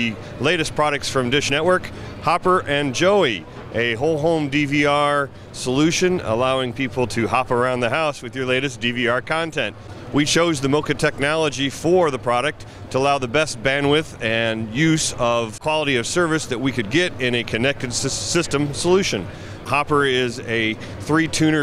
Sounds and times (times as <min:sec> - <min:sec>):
Speech: 0:00.0 - 0:21.6.